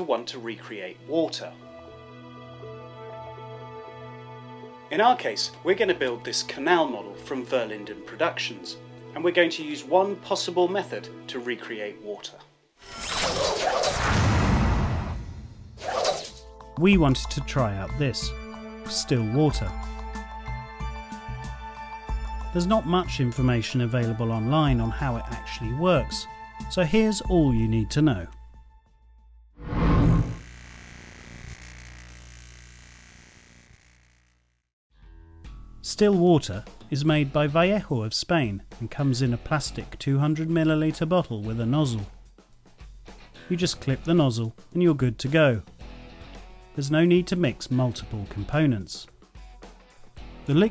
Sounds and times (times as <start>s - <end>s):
Speech: 0.0s - 1.6s, 4.9s - 12.5s, 16.8s - 19.8s, 22.5s - 28.3s, 35.8s - 42.1s, 43.5s - 45.7s, 46.8s - 49.1s, 50.5s - 50.7s
Music: 0.0s - 12.7s, 15.8s - 29.5s, 34.9s - 50.7s.